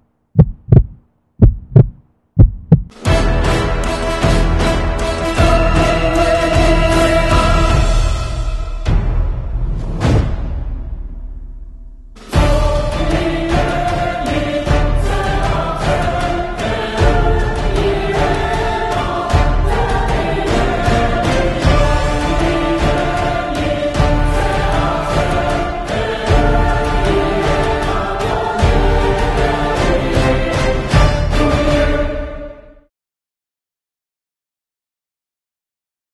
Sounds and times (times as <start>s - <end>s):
Music: 2.9s - 32.9s.